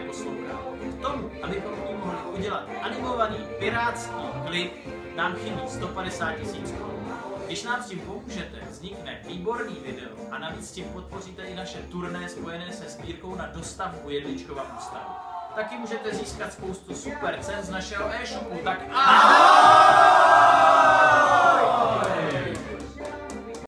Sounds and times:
Music: 0.0s - 23.6s
Speech: 1.0s - 19.2s.

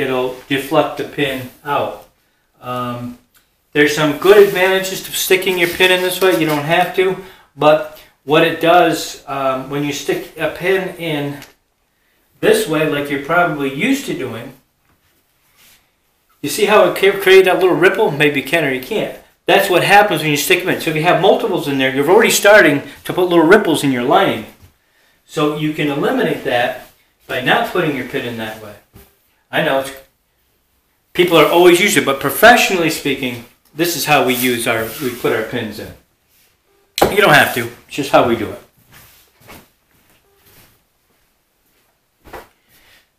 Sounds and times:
Speech: 0.0s - 11.6s, 12.4s - 14.6s, 16.4s - 24.6s, 25.3s - 28.9s, 29.5s - 30.1s, 31.1s - 36.0s, 37.0s - 38.8s
Inside, small room: 0.0s - 43.1s.

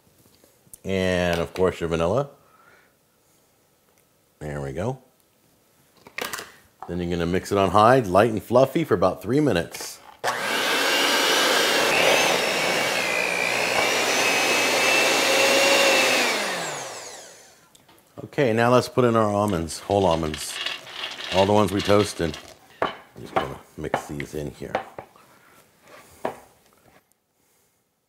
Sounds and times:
Blender: 10.3s - 17.6s, 20.0s - 22.6s.

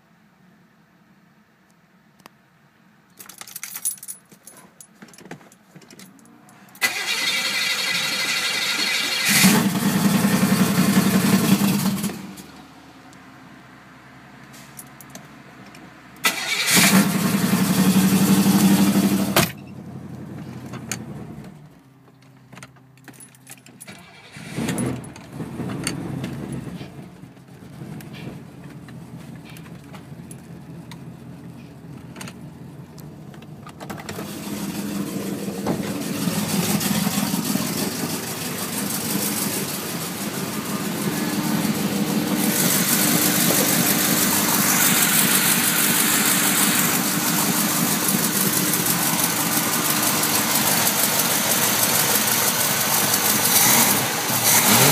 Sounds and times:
Medium engine (mid frequency): 0.0s - 54.9s
Vehicle: 0.0s - 54.9s
Engine starting: 6.8s - 10.3s, 16.2s - 17.4s, 23.9s - 26.9s, 34.0s - 35.1s.

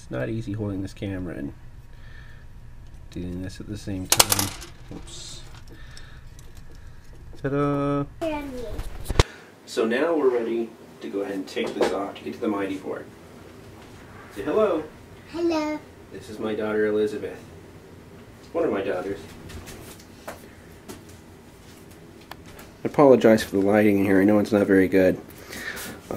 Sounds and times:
Speech: 9.7s - 13.1s, 22.8s - 25.2s.

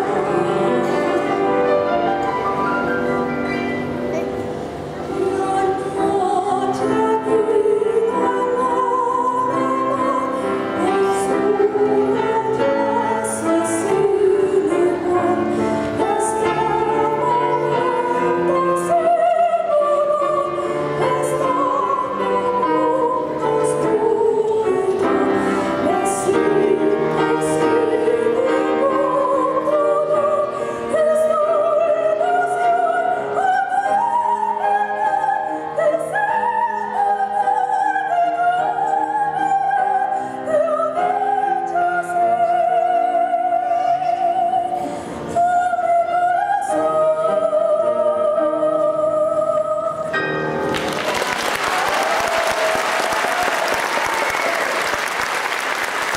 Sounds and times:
Music: 0.0s - 56.1s
Singing: 5.1s - 50.2s
Applause: 50.6s - 56.1s.

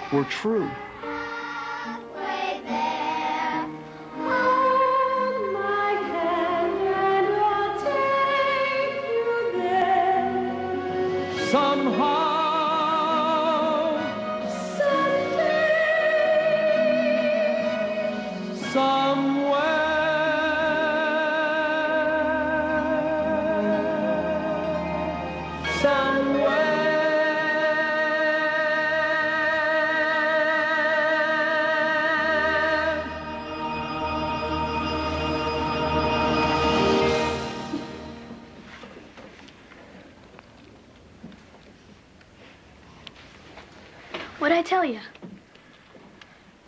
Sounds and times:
Music: 0.0s - 39.4s
Male singing: 11.4s - 14.1s, 18.6s - 24.9s, 25.7s - 33.2s
Female singing: 14.6s - 18.0s.

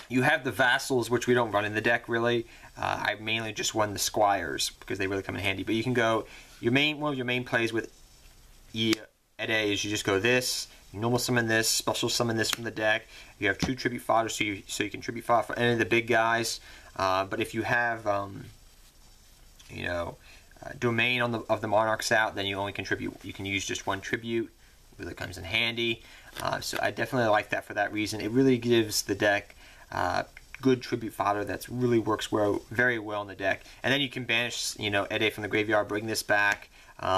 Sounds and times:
Speech: 0.0s - 7.9s, 8.7s - 18.6s, 19.6s - 37.1s.

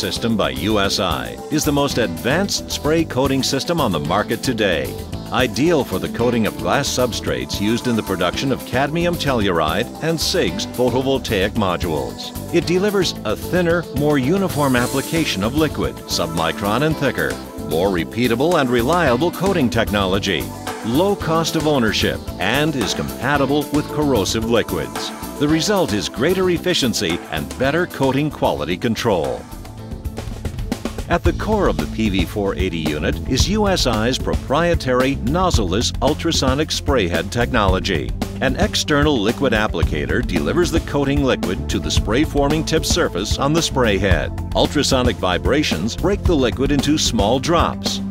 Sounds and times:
Speech: 0.0s - 29.5s, 31.1s - 48.1s
Music: 0.0s - 48.1s.

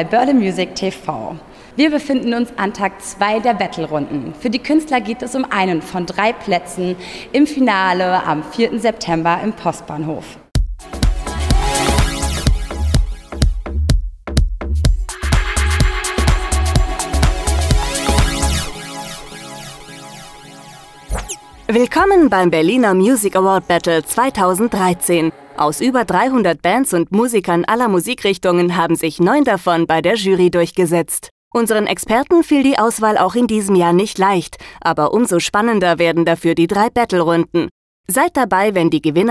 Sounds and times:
Speech: 0.0s - 10.4s, 21.7s - 39.3s.

